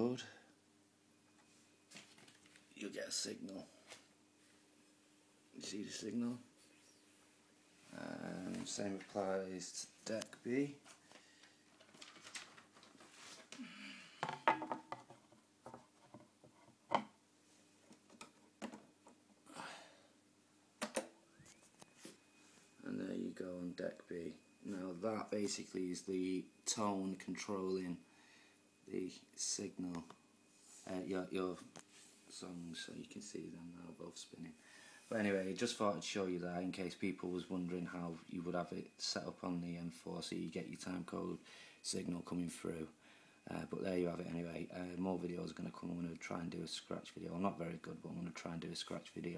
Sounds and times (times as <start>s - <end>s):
Speech: 0.0s - 0.4s, 2.8s - 3.8s, 5.6s - 6.5s, 7.9s - 10.8s, 22.8s - 28.0s, 28.9s - 30.1s, 30.8s - 31.7s, 32.3s - 49.3s.